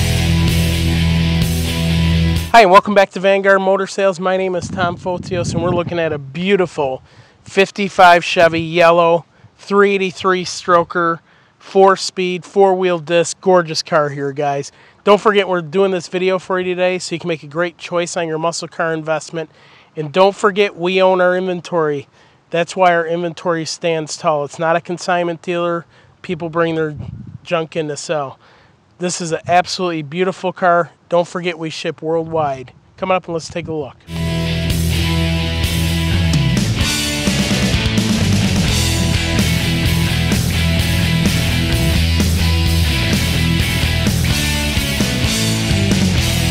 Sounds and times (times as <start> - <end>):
Speech: 2.5 - 28.4, 29.0 - 34.0.